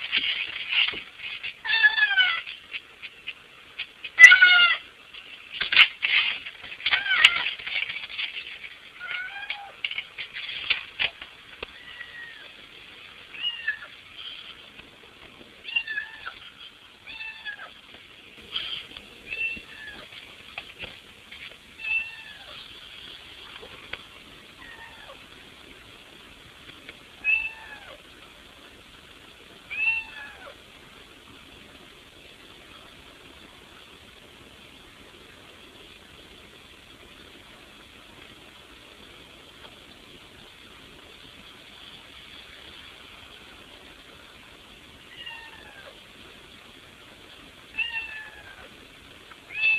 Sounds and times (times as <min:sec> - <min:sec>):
Meow: 0:01.6 - 0:02.4, 0:04.2 - 0:04.8, 0:09.0 - 0:09.8, 0:11.8 - 0:12.5, 0:13.4 - 0:13.9, 0:15.7 - 0:16.4, 0:17.1 - 0:17.7, 0:21.8 - 0:22.6, 0:24.6 - 0:25.2, 0:27.2 - 0:28.0, 0:29.7 - 0:30.5, 0:45.1 - 0:46.0, 0:47.7 - 0:48.7, 0:49.5 - 0:49.7.